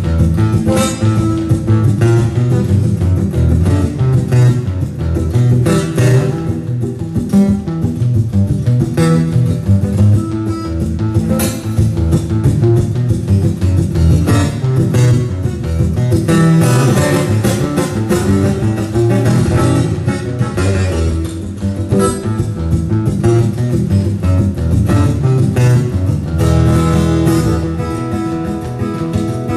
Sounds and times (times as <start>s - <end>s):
Strum: 0.0s - 29.5s.